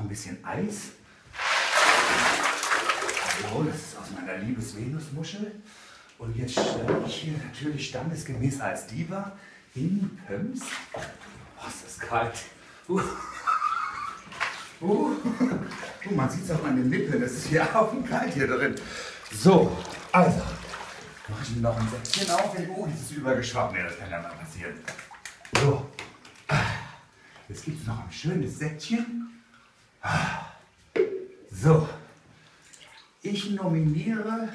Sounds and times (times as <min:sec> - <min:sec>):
Speech: 0:00.0 - 0:01.0, 0:03.2 - 0:10.9, 0:11.6 - 0:13.2, 0:14.8 - 0:20.6, 0:21.3 - 0:26.9, 0:27.5 - 0:29.4, 0:31.5 - 0:32.1, 0:33.2 - 0:34.5.